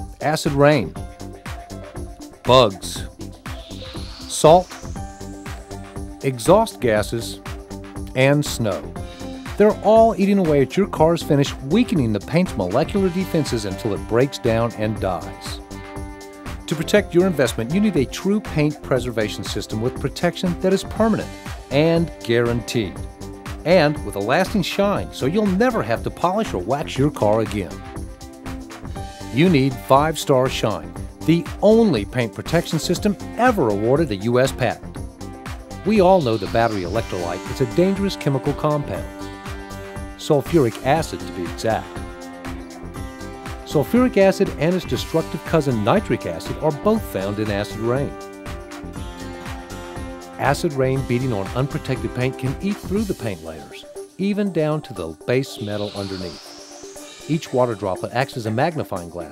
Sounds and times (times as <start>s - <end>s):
Music: 0.0s - 59.3s
Speech: 0.2s - 1.0s, 2.5s - 3.1s, 4.3s - 4.7s, 6.2s - 7.4s, 8.2s - 8.9s, 9.6s - 15.6s, 16.7s - 23.0s, 23.7s - 27.8s, 29.3s - 34.8s, 35.8s - 39.1s, 40.2s - 41.9s, 43.7s - 48.2s, 50.4s - 56.4s, 57.3s - 59.3s.